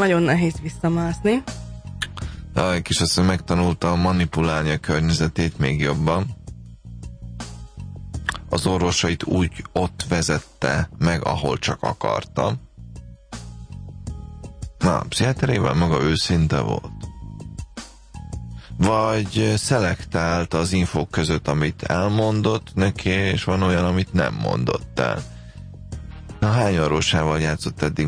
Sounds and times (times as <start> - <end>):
Speech: 0.0 - 1.4, 2.6 - 6.4, 8.3 - 12.6, 14.8 - 17.0, 18.8 - 25.2, 26.4 - 28.0
Music: 0.0 - 28.0.